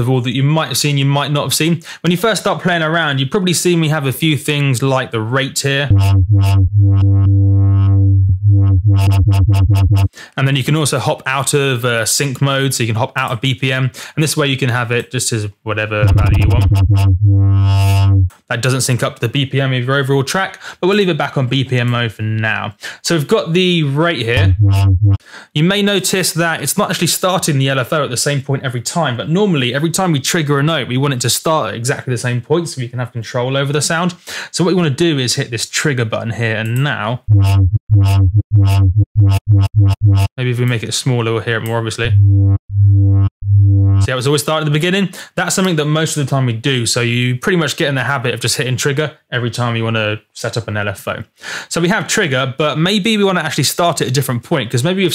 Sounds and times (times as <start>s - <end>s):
Speech: 0.0s - 6.0s, 10.2s - 16.8s, 17.8s - 24.5s, 25.5s - 37.2s, 40.4s - 42.2s, 44.1s - 55.1s.